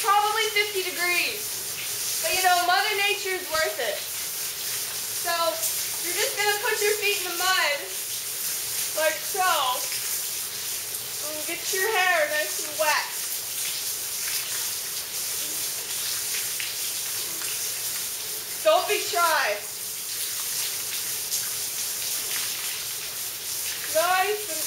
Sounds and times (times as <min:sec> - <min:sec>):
Speech: 0:00.0 - 0:01.4, 0:02.2 - 0:04.0, 0:05.2 - 0:07.9, 0:09.0 - 0:09.9, 0:11.2 - 0:13.2, 0:18.6 - 0:19.7, 0:23.9 - 0:24.6
Rain on surface: 0:00.0 - 0:24.6.